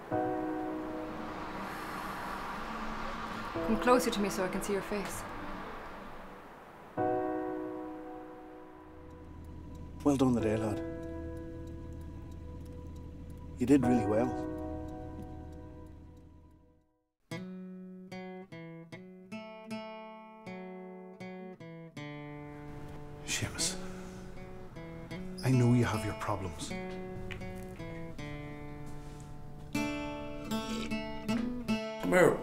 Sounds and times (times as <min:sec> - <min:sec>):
Music: 0:00.0 - 0:06.3, 0:07.0 - 0:32.4
Speech: 0:10.0 - 0:10.8, 0:13.6 - 0:14.4, 0:23.3 - 0:23.8, 0:25.4 - 0:26.8, 0:32.0 - 0:32.4.